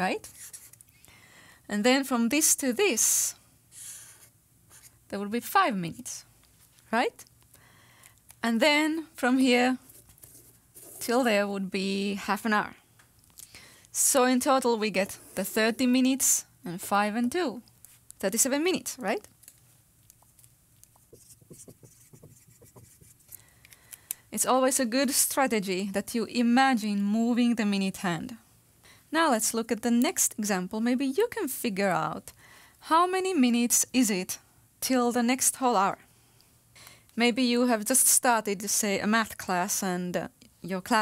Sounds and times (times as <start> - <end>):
Writing: 0.3 - 0.8, 3.8 - 4.9, 20.1 - 23.4
Speech: 1.7 - 3.4, 5.1 - 6.3, 6.9 - 7.3, 8.4 - 9.8, 11.0 - 12.8, 14.0 - 17.6, 18.2 - 19.3, 24.4 - 28.4, 29.2 - 32.3, 32.9 - 36.0, 37.2 - 41.0.